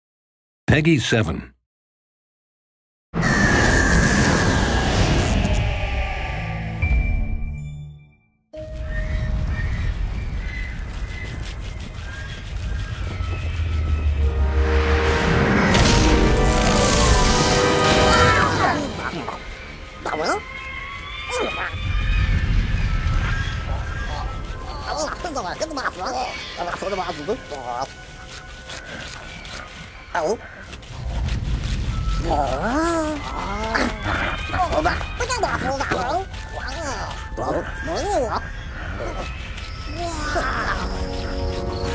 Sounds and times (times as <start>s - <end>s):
Speech: 0.7s - 1.6s, 24.7s - 27.9s, 30.2s - 30.4s, 32.2s - 38.4s
Music: 6.4s - 9.1s, 14.2s - 19.7s, 40.4s - 41.9s.